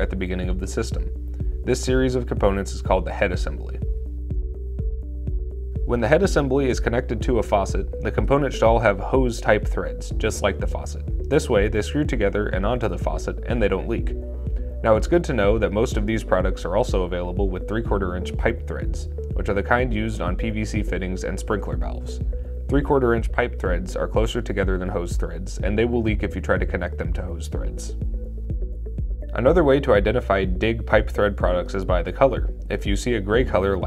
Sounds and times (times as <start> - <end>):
Speech: 0.0 - 1.1, 1.7 - 3.9, 5.9 - 14.2, 14.8 - 28.0, 29.3 - 33.8
Music: 0.0 - 33.8.